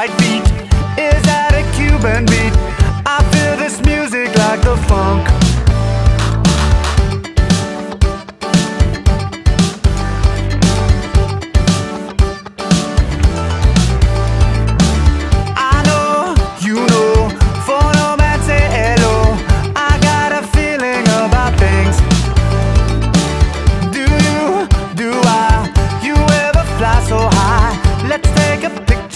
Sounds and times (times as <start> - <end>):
Music: 0.0 - 29.1.